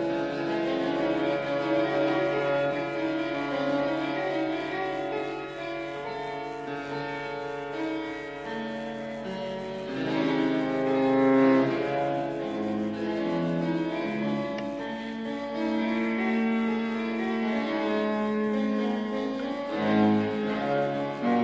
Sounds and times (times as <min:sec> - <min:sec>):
Violin, fiddle: 0:09.8 - 0:21.4.